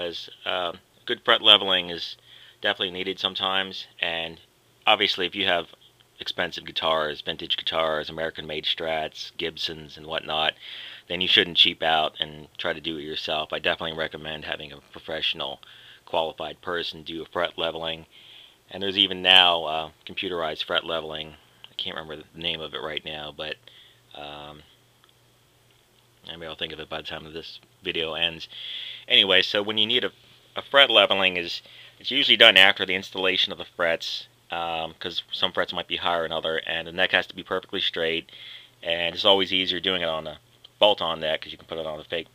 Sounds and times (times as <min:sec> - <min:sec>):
Speech: 0:00.0 - 0:18.1, 0:18.7 - 0:24.7, 0:26.2 - 0:28.5, 0:29.1 - 0:42.3.